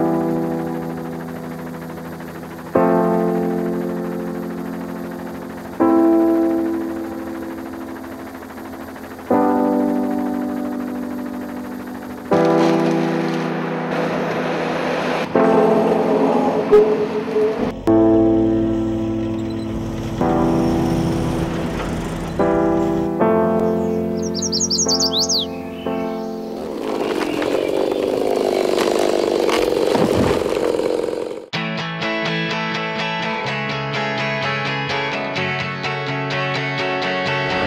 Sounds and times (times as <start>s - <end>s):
Music: 0.0s - 26.6s, 31.5s - 37.6s.